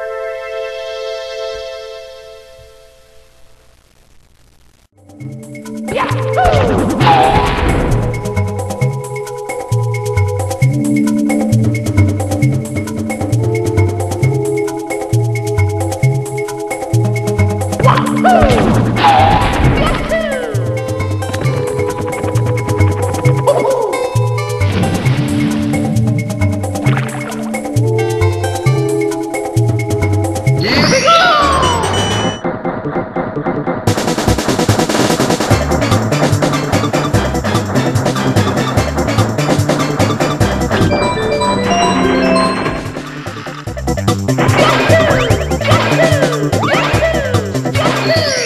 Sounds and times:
Music: 0:00.0 - 0:03.8, 0:04.9 - 0:48.4.

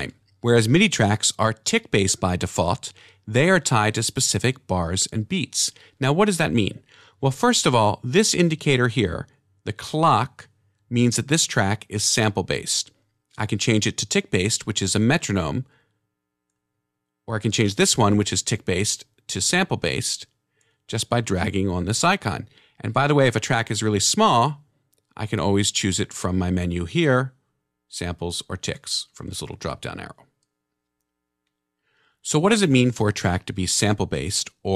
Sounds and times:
Speech: 0:00.0 - 0:15.7, 0:17.3 - 0:20.3, 0:20.9 - 0:30.3, 0:32.2 - 0:34.7.

